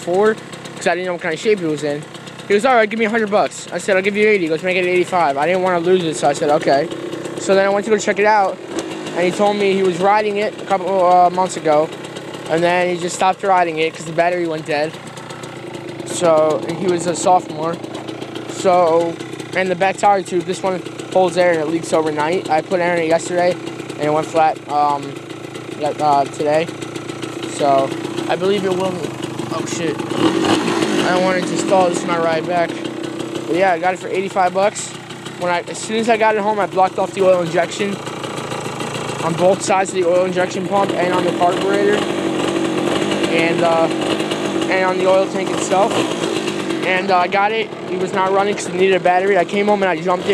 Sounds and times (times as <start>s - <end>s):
Speech: 0.0s - 8.6s, 9.2s - 11.9s, 12.5s - 14.9s, 16.1s - 17.8s, 18.5s - 25.2s, 25.8s - 26.7s, 27.5s - 30.0s, 31.0s - 32.9s, 33.5s - 38.0s, 39.2s - 42.0s, 43.3s - 44.0s, 44.7s - 45.9s, 46.8s - 50.3s.